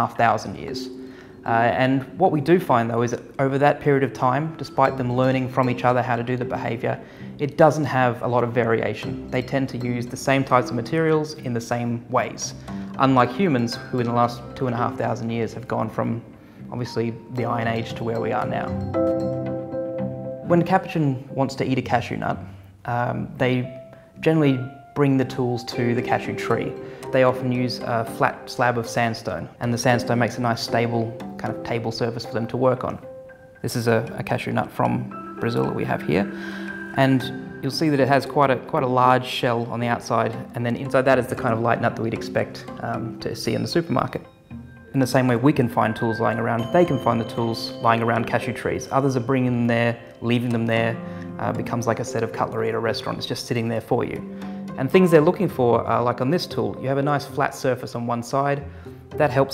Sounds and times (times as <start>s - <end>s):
Speech: 0.0s - 18.8s, 20.5s - 33.0s, 33.6s - 36.4s, 37.0s - 44.3s, 45.0s - 54.2s, 54.8s - 58.6s, 59.2s - 59.5s
Music: 0.0s - 59.5s.